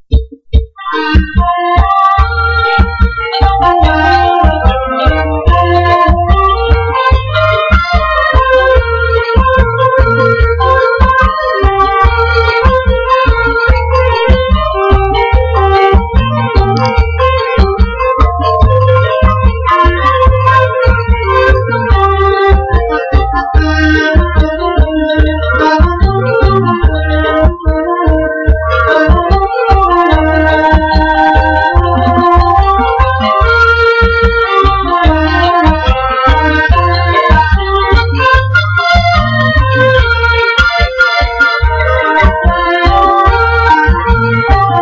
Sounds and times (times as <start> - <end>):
Background music: 0.3 - 44.8.